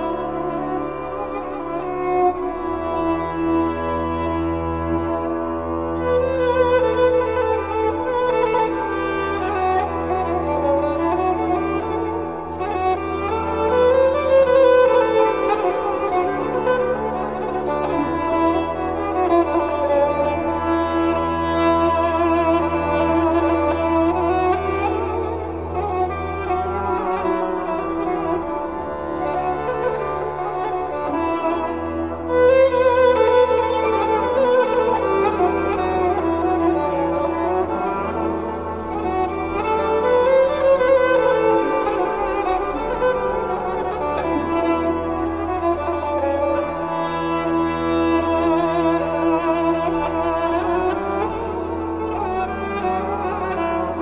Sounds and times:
Violin, fiddle: 0:00.0 - 0:54.0.

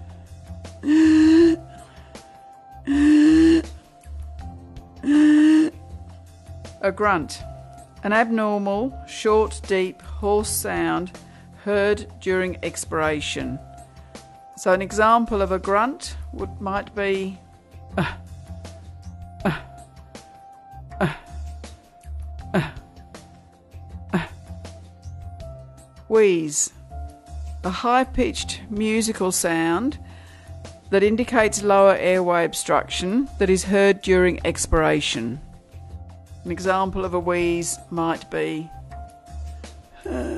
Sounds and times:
Music: 0:00.0 - 0:40.3.

